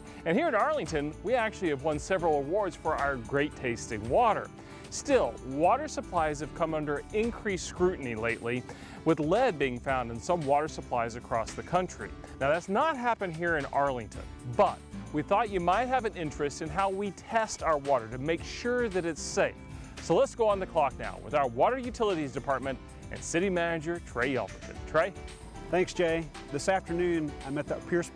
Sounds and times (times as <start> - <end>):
Music: 0.0 - 28.1
Speech: 0.3 - 28.1.